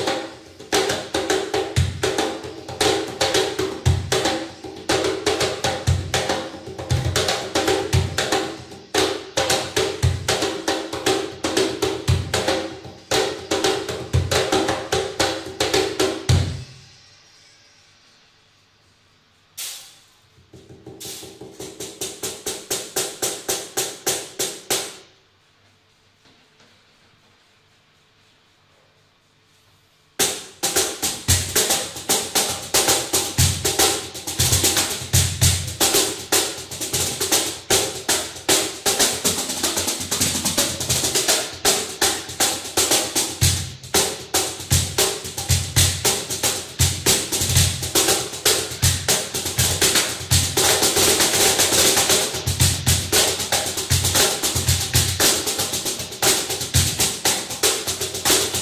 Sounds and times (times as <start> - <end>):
Percussion: 0.0 - 58.6.